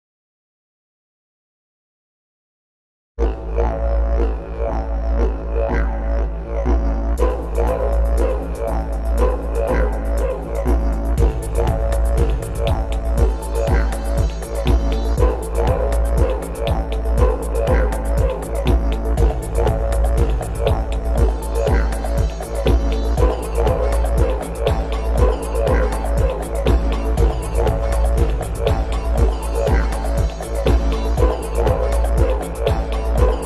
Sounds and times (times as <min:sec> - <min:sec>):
Music: 0:03.2 - 0:33.4.